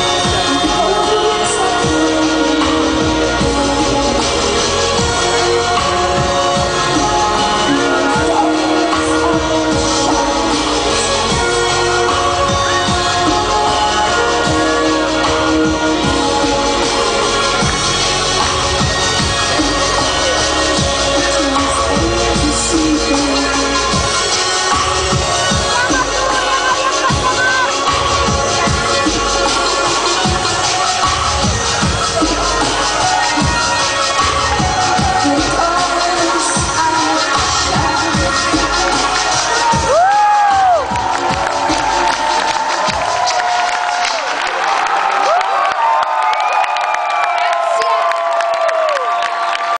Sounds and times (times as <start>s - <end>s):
Cheering: 0.0s - 49.7s.